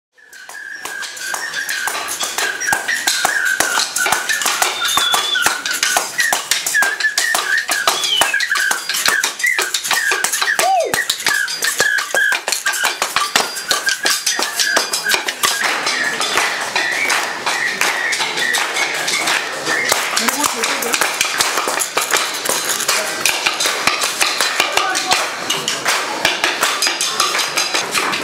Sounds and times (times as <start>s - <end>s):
Percussion: 0.2s - 28.2s.